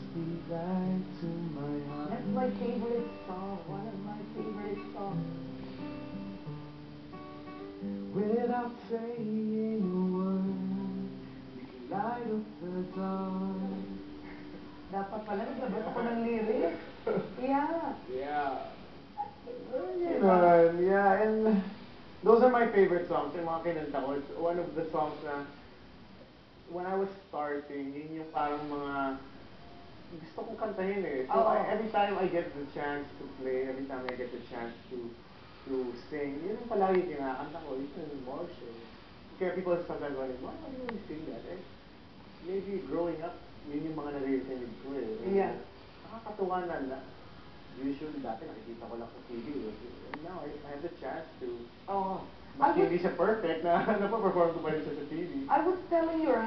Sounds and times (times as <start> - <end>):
Speech: 3.6 - 5.2, 14.9 - 18.8, 19.4 - 25.6, 26.7 - 29.3, 30.1 - 41.7, 47.8 - 56.4.